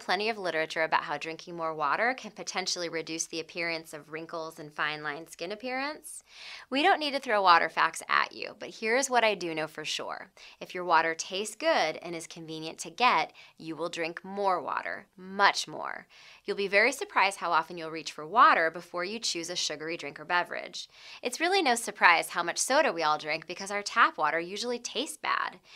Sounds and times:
Speech: 0:00.0 - 0:25.6.

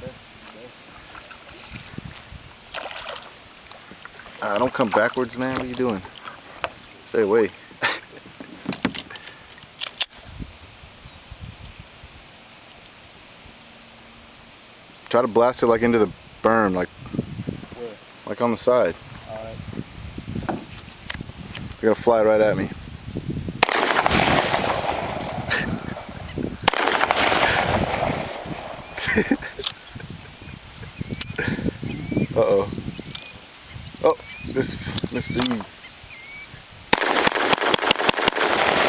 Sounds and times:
Speech: 0:04.4 - 0:06.1, 0:07.1 - 0:07.6, 0:17.8 - 0:19.6, 0:21.8 - 0:22.8, 0:34.0 - 0:35.7.

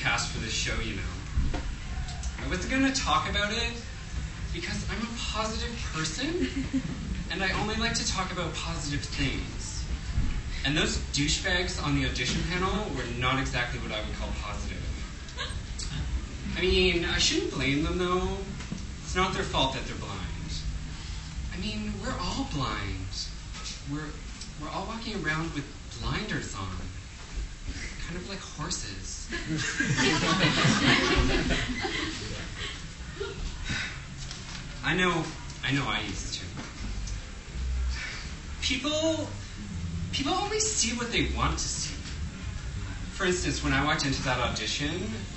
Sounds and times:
Narration, monologue: 0:00.0 - 0:01.6, 0:02.2 - 0:32.6, 0:34.0 - 0:45.3.

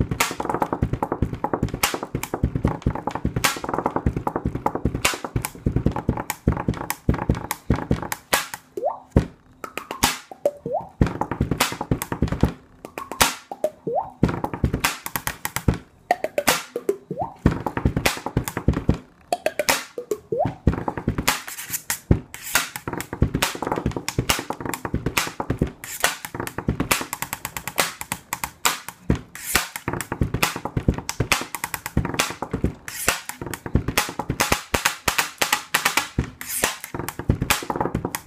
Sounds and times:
Beatboxing: 0:00.0 - 0:38.2
Tapping (guitar technique): 0:00.6 - 0:21.3.

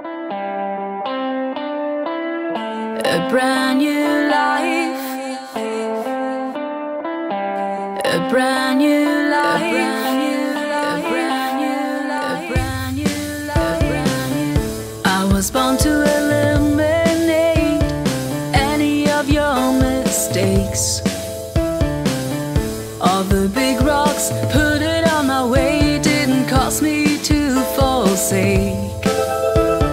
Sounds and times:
Music: 0:00.0 - 0:29.9.

